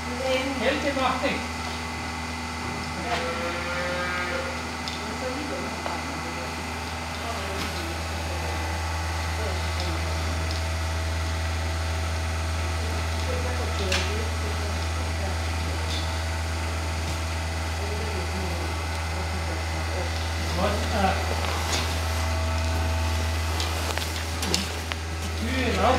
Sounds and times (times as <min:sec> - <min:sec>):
Speech: 0:04.9 - 0:10.6, 0:12.6 - 0:16.2, 0:17.8 - 0:21.8, 0:25.3 - 0:25.9.